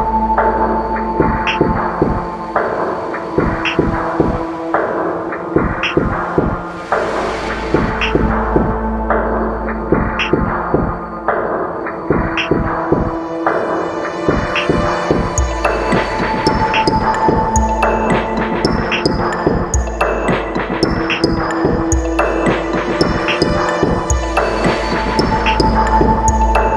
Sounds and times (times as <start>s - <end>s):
Electronic music: 0.0s - 26.7s.